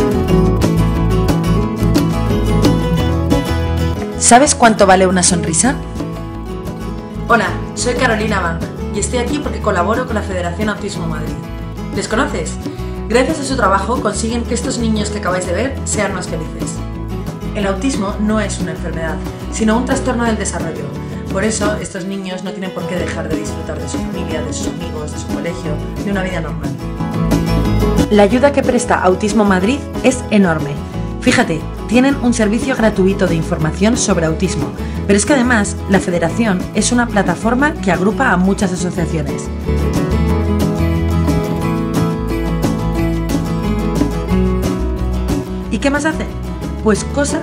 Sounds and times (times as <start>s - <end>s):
Music: 0.0s - 47.4s
Speech: 4.2s - 5.8s, 7.3s - 11.4s, 12.0s - 16.8s, 17.6s - 26.8s, 28.1s - 39.5s, 45.7s - 47.4s.